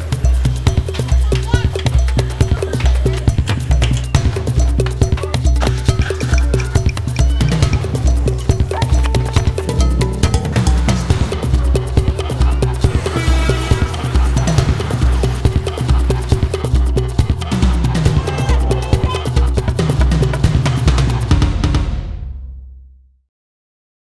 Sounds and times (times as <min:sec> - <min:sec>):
Music: 0:00.0 - 0:23.2
Speech: 0:01.1 - 0:03.0, 0:18.1 - 0:19.5.